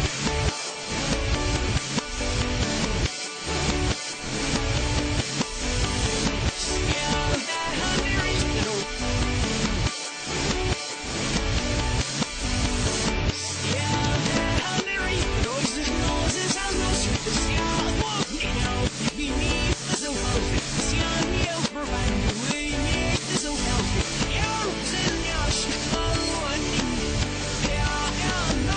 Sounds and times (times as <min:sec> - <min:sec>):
Music: 0:00.0 - 0:28.7.